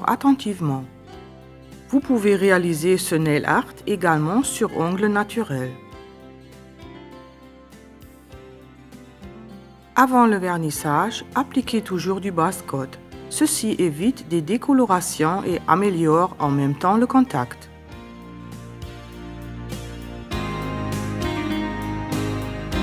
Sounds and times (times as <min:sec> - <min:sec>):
Speech: 0:00.0 - 0:00.9, 0:01.9 - 0:05.8, 0:10.0 - 0:17.7
Music: 0:00.0 - 0:22.8.